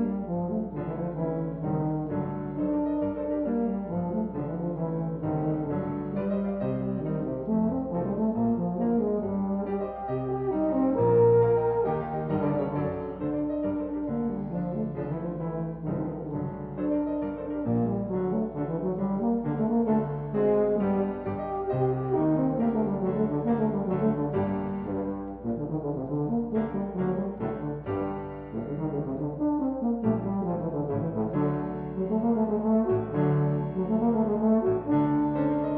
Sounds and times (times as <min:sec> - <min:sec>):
French horn: 0:00.0 - 0:35.7.